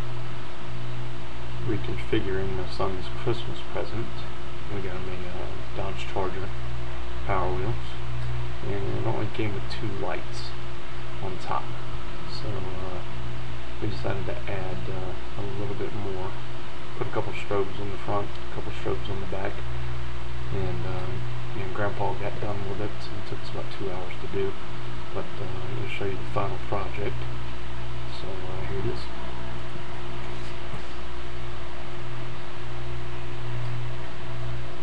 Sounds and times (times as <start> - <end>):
Speech: 1.6 - 6.6, 7.2 - 10.6, 11.2 - 13.1, 13.8 - 16.4, 17.0 - 19.7, 20.5 - 27.3, 28.1 - 31.0.